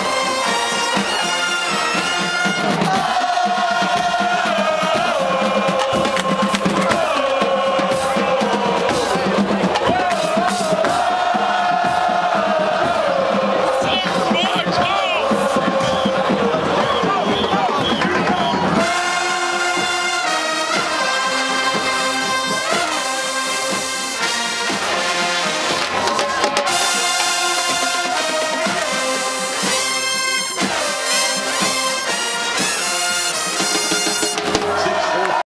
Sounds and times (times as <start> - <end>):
Music: 0.0 - 35.4.